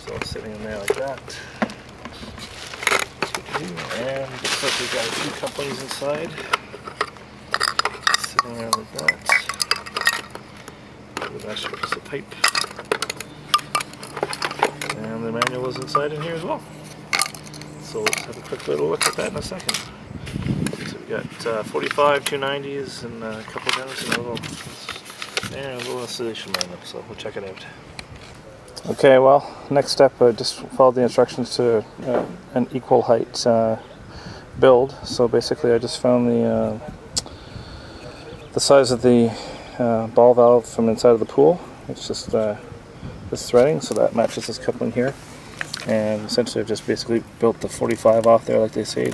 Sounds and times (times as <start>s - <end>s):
Speech: 0.0s - 1.2s, 3.5s - 6.5s, 8.2s - 9.3s, 11.2s - 12.4s, 14.9s - 16.6s, 17.9s - 19.7s, 20.8s - 24.6s, 25.5s - 27.8s, 28.8s - 33.8s, 34.6s - 37.1s, 38.0s - 42.6s, 43.3s - 45.2s, 45.8s - 49.1s
Outside, rural or natural: 0.0s - 49.1s.